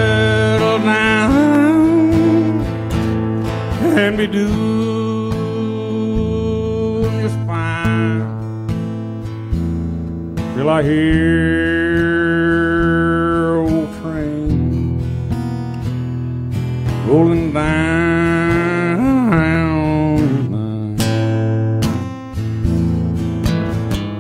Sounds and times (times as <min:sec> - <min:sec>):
Country: 0:00.0 - 0:24.2.